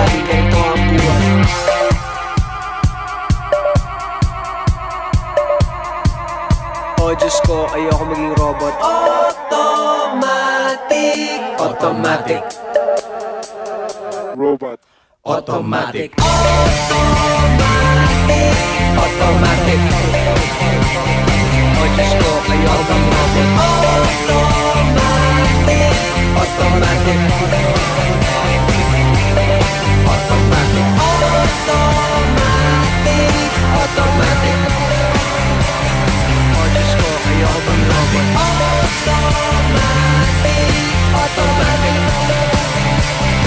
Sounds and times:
Speech: 0:00.0 - 0:01.4, 0:07.0 - 0:09.2, 0:14.4 - 0:16.1
Music: 0:00.0 - 0:14.4, 0:16.2 - 0:43.4.

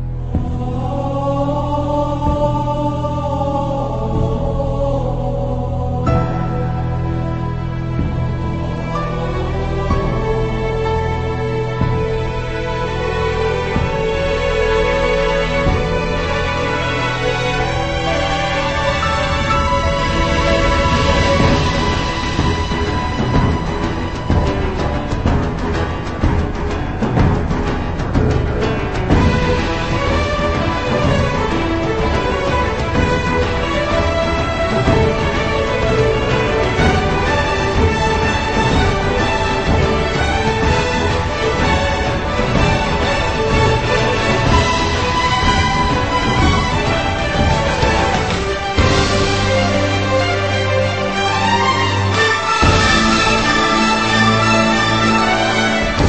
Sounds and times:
Music: 0:00.0 - 0:56.0.

